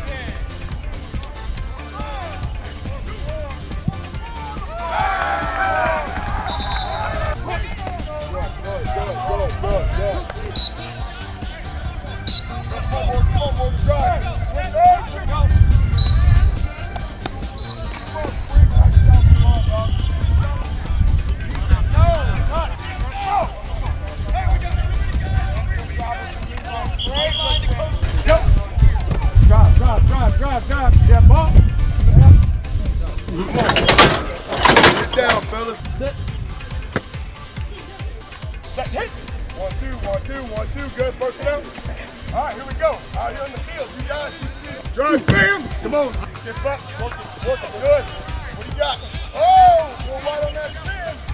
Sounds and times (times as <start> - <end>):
Music: 0.0 - 51.3
Speech: 7.2 - 15.6, 16.2 - 32.2, 32.8 - 36.2, 37.5 - 51.3.